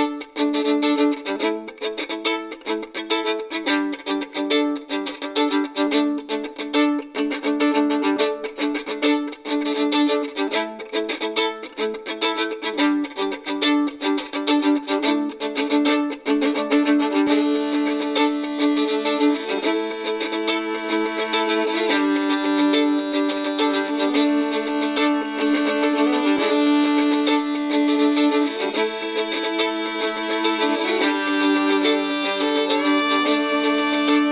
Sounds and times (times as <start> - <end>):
Violin, fiddle: 0.0 - 34.3.